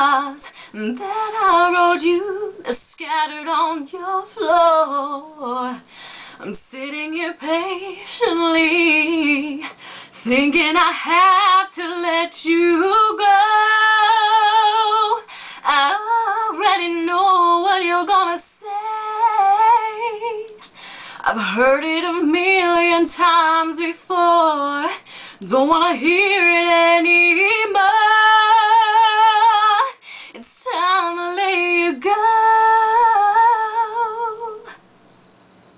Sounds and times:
Female singing: 0.0s - 34.8s.

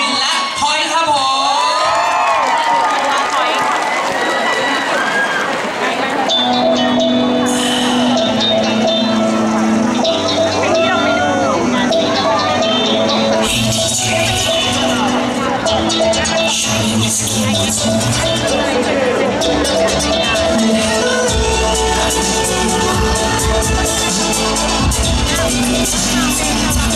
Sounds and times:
Speech: 0.0s - 2.0s, 5.6s - 26.9s
Music: 6.0s - 26.9s.

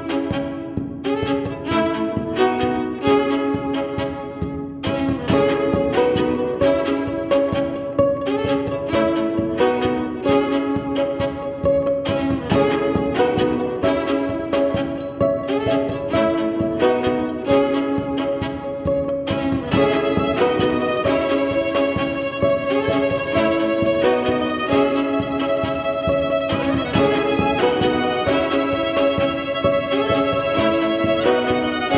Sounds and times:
Violin, fiddle: 0.0s - 31.9s.

